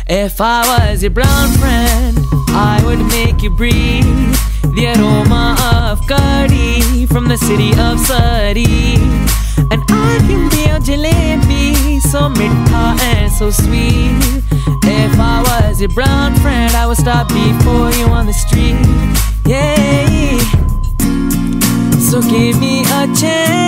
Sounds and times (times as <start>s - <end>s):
Music: 0.0s - 23.6s.